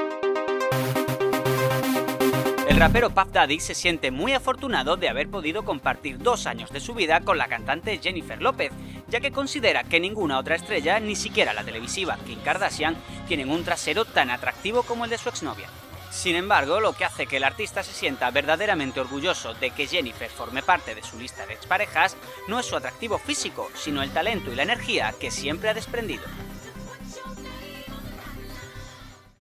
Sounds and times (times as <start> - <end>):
Music: 0.0 - 29.4
Speech: 2.7 - 26.4.